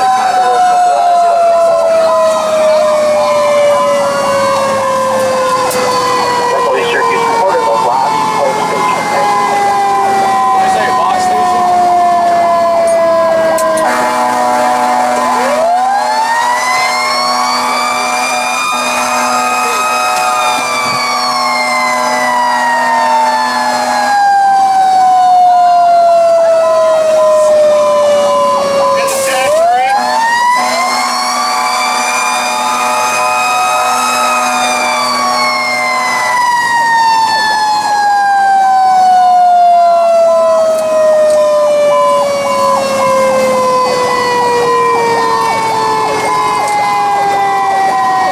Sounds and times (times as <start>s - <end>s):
Vehicle: 0.0s - 48.3s
Speech: 6.5s - 9.7s, 10.6s - 11.6s, 28.9s - 30.1s.